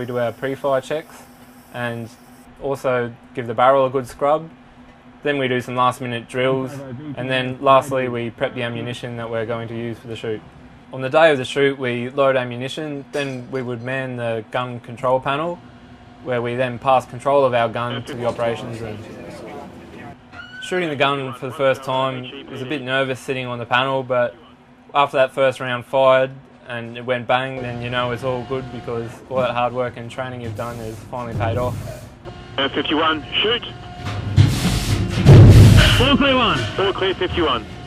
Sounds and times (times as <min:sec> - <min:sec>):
Speech: 0:00.0 - 0:01.2, 0:01.8 - 0:04.5, 0:05.2 - 0:15.6, 0:16.2 - 0:31.9, 0:32.6 - 0:33.8, 0:35.8 - 0:37.7.